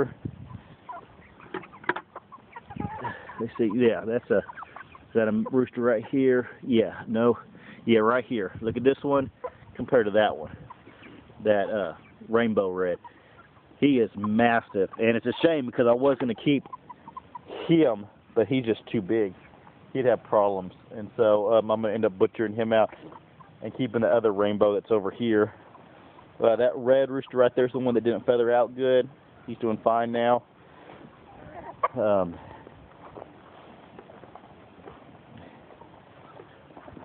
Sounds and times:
Bird: 0.2 - 6.2, 9.2 - 17.6, 30.9 - 37.0
Chicken, rooster: 0.2 - 6.4, 9.1 - 18.0, 19.3 - 19.9, 22.8 - 23.7, 30.9 - 37.0
Speech: 3.4 - 4.5, 5.2 - 10.6, 11.4 - 13.0, 13.8 - 16.6, 17.5 - 19.4, 20.0 - 22.9, 23.6 - 25.6, 26.4 - 30.5, 31.9 - 32.5.

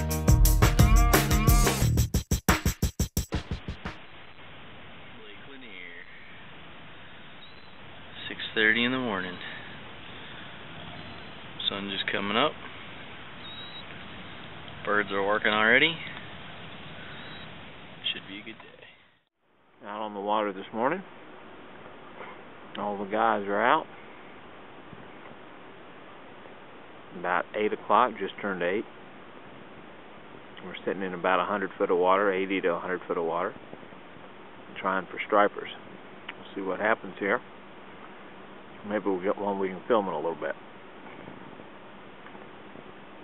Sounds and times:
Boat, Water vehicle: 4.0 - 19.3, 20.5 - 43.2
Speech: 5.1 - 6.2, 8.2 - 9.6, 11.6 - 12.6, 14.8 - 16.2, 18.0 - 19.0, 19.8 - 21.1, 22.8 - 23.9, 27.1 - 28.9, 30.6 - 33.6, 34.8 - 35.8, 36.4 - 37.4, 38.8 - 40.6.

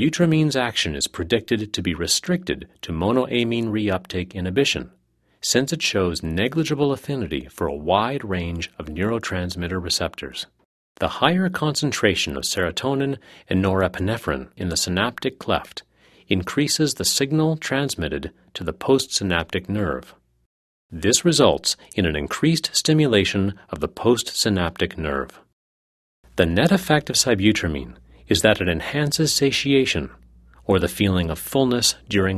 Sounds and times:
Speech synthesizer: 5.5 - 15.8, 21.0 - 25.4.

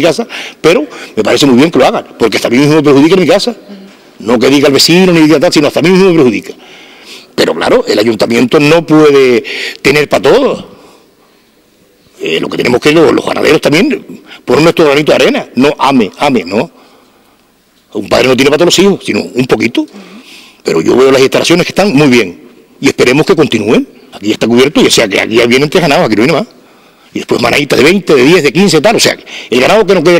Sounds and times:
Narration, monologue: 0.0 - 30.1.

